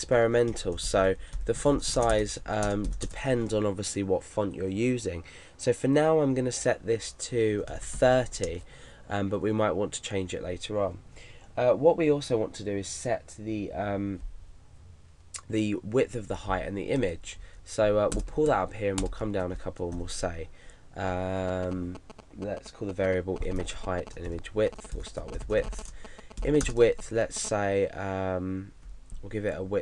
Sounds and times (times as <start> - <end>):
Speech: 0.0 - 11.0, 11.6 - 14.2, 15.4 - 25.8, 26.4 - 29.8.